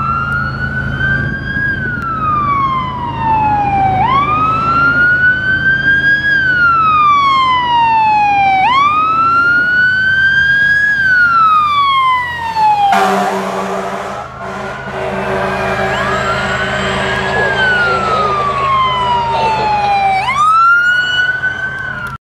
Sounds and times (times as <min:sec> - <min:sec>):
Car: 0:00.0 - 0:22.2
Speech: 0:17.2 - 0:20.3.